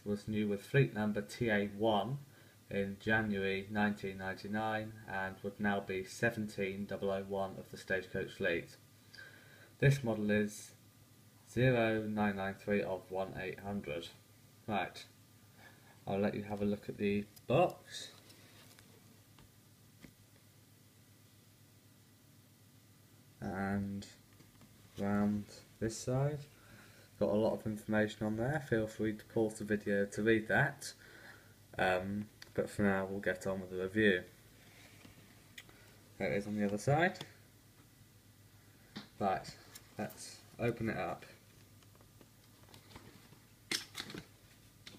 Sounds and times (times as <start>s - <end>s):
Speech: 0.0s - 8.8s, 9.8s - 10.8s, 11.5s - 15.2s, 16.0s - 18.2s, 23.4s - 24.2s, 25.0s - 26.5s, 27.2s - 31.0s, 31.7s - 34.4s, 36.2s - 37.4s, 39.2s - 41.4s.